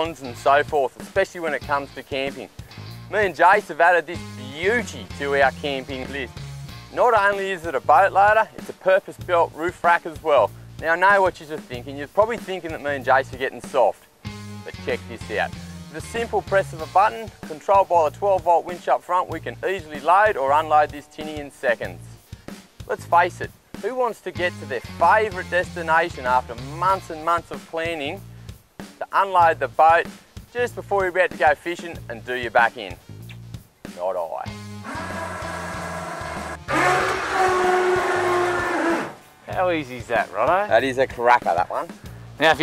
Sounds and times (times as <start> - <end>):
Speech: 0.0 - 2.5, 3.1 - 6.3, 6.9 - 14.0, 14.7 - 22.2, 22.9 - 28.2, 29.0 - 33.0, 33.9 - 34.5, 39.5 - 42.6
Music: 0.0 - 42.6.